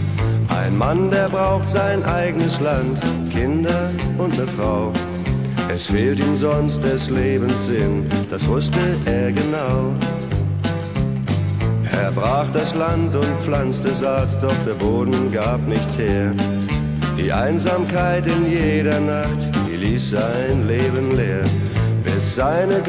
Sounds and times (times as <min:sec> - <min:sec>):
Music: 0:00.0 - 0:22.8.